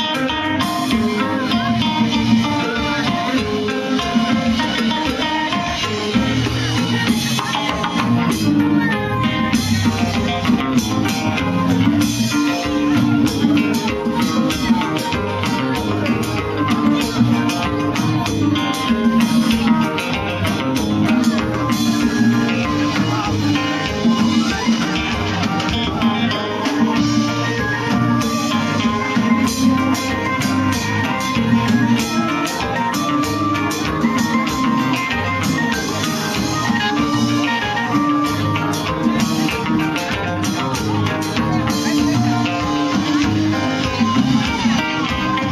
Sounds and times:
Music: 0.0 - 45.5
Speech: 0.1 - 45.5.

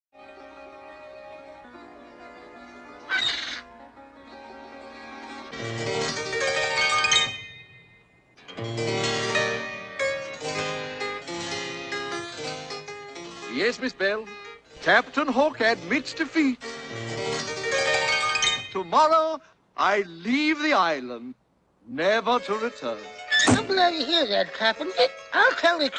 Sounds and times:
Piano: 0.2 - 18.8.

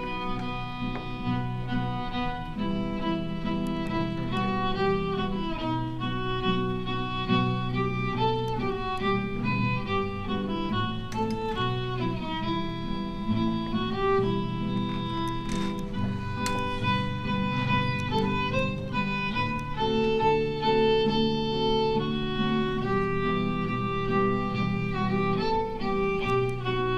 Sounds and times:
Classical music: 0.0 - 26.9
Orchestra: 0.0 - 26.9
Violin, fiddle: 0.0 - 26.9
Wedding music: 0.0 - 26.9.

